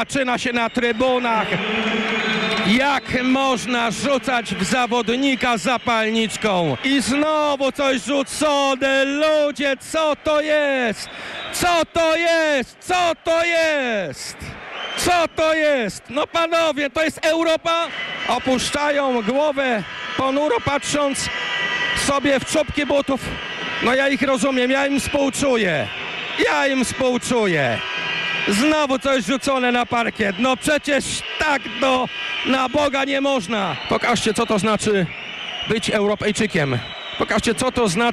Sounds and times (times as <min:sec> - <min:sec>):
Speech: 0:00.0 - 0:01.6, 0:02.6 - 0:21.3, 0:22.0 - 0:27.8, 0:28.5 - 0:35.1, 0:35.7 - 0:38.1.